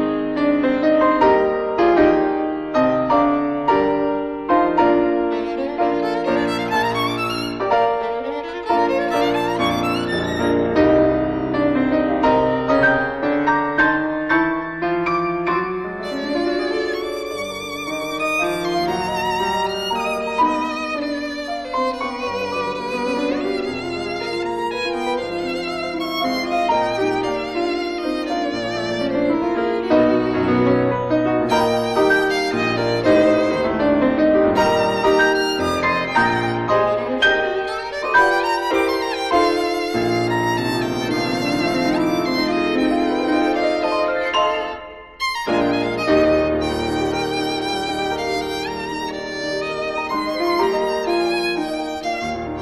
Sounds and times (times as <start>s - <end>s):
Violin, fiddle: 0.0s - 13.8s, 15.8s - 52.6s.